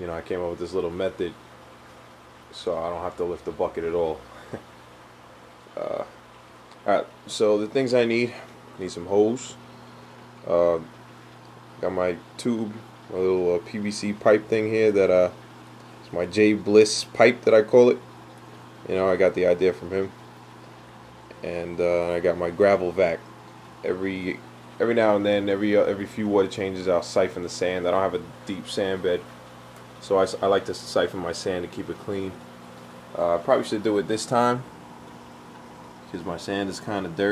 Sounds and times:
Speech: 0.0s - 1.4s, 2.5s - 4.3s, 5.8s - 6.2s, 6.8s - 9.6s, 10.4s - 10.9s, 11.8s - 15.4s, 16.0s - 18.0s, 18.8s - 20.2s, 21.3s - 29.3s, 30.0s - 32.4s, 33.1s - 34.7s, 36.1s - 37.3s.

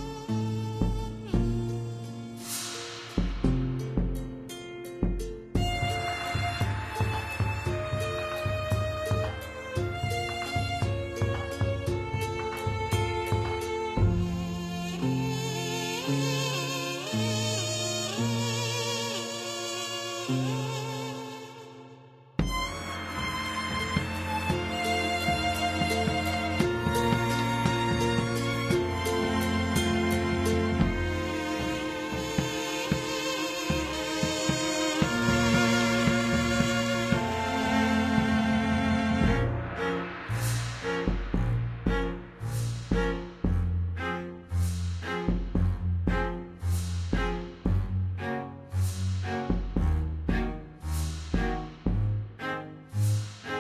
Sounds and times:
Middle Eastern music: 0.0s - 21.7s, 22.4s - 48.0s.

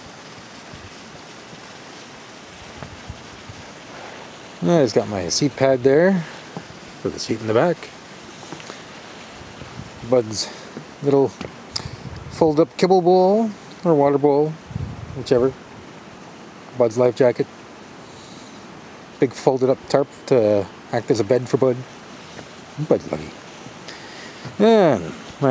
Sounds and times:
Speech: 4.6s - 6.3s, 7.0s - 7.9s, 10.0s - 11.4s, 12.3s - 14.6s, 15.2s - 15.6s, 16.8s - 17.5s, 19.2s - 21.9s, 22.8s - 23.4s, 24.6s - 25.5s.

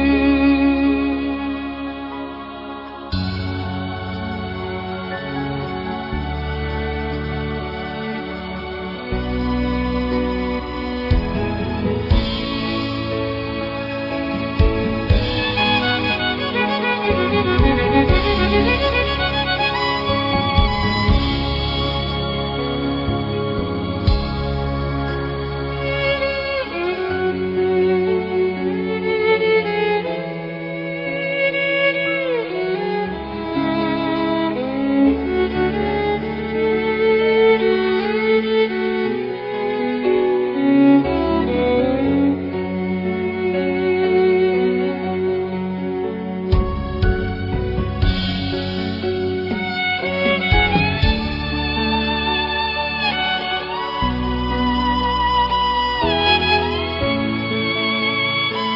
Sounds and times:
Violin, fiddle: 0.0s - 58.7s.

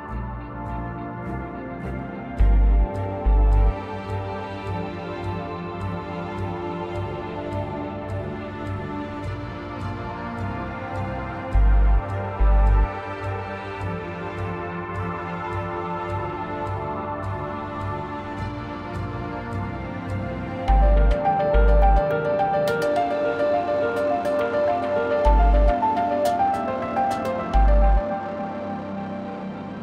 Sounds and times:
Music: 0.0s - 29.8s.

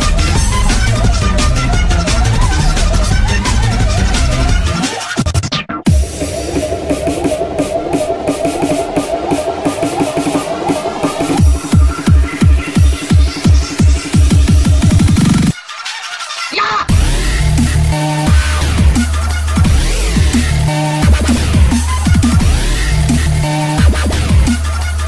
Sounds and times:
Music: 0.0s - 25.0s.

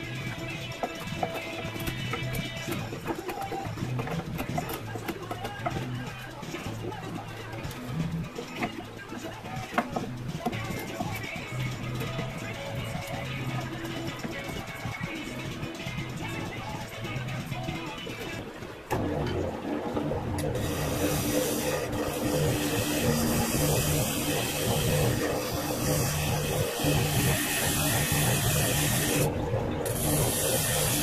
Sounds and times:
Inside, small room: 0.0s - 31.0s
Wood: 0.7s - 12.3s, 20.4s - 31.0s.

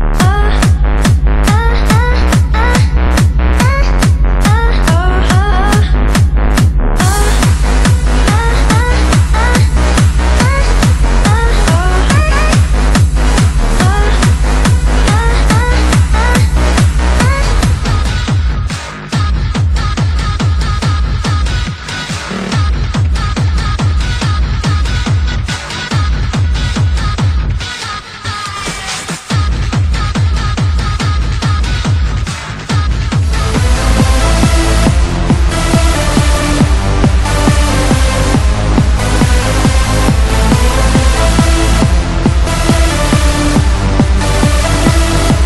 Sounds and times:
Music: 0.0s - 45.4s.

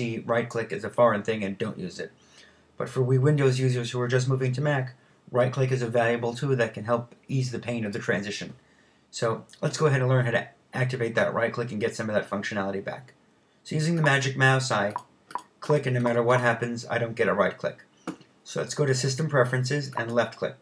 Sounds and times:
Speech: 0.0s - 2.2s, 2.8s - 15.0s, 15.6s - 20.6s.

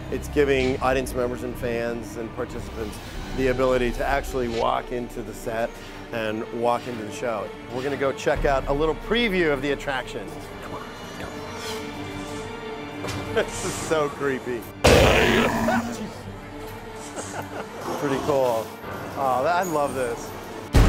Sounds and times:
Music: 0.0s - 20.8s
Speech: 0.1s - 10.3s, 13.4s - 14.7s, 17.9s - 20.3s.

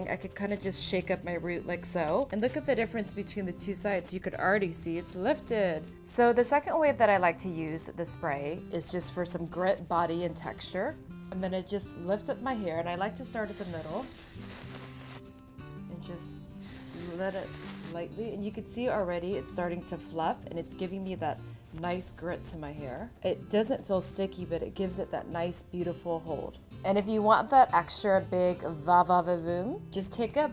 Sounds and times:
Speech: 0.0s - 14.1s, 15.8s - 16.4s, 17.0s - 30.5s
Music: 0.0s - 30.5s.

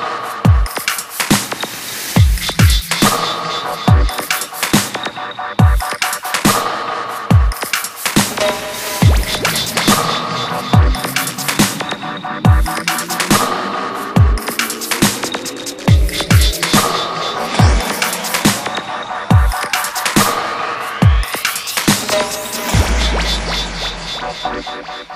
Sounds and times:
Dubstep: 0.2s - 25.1s.

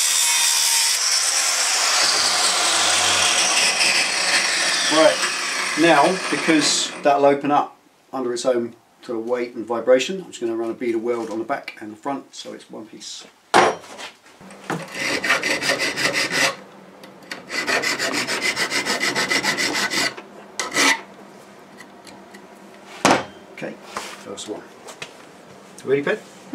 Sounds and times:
Filing (rasp): 0.0s - 7.0s, 14.8s - 16.6s, 17.4s - 21.1s.

